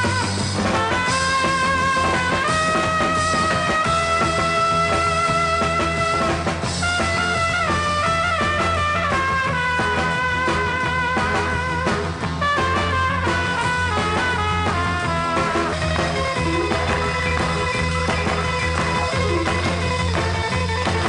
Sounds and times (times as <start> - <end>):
Music: 0.0 - 21.0.